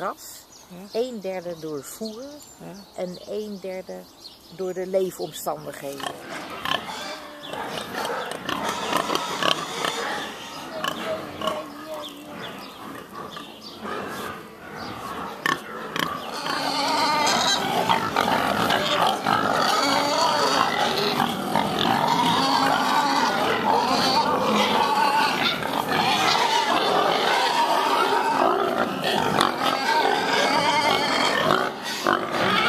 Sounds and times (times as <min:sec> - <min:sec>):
Speech: 0:00.0 - 0:06.2, 0:10.7 - 0:12.6
Pig: 0:06.0 - 0:32.6.